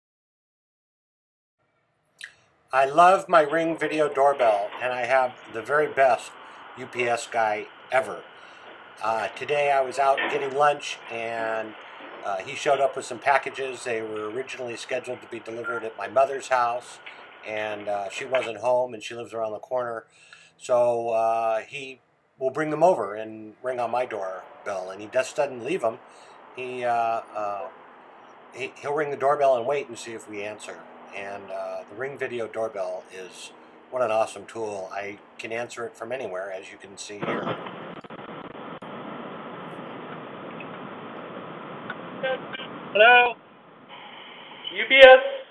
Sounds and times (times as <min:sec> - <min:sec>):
Speech: 0:02.8 - 0:08.3, 0:09.0 - 0:26.0, 0:26.6 - 0:27.7, 0:28.6 - 0:37.6, 0:43.0 - 0:43.4, 0:44.7 - 0:45.3.